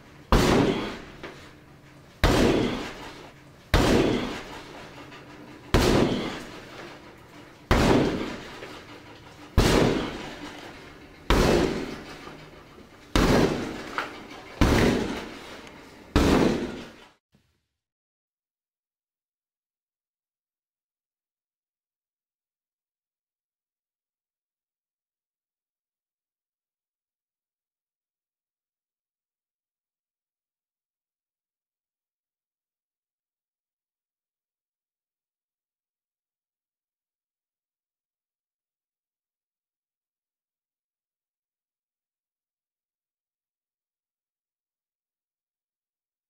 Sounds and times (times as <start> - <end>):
Door: 7.7 - 17.1.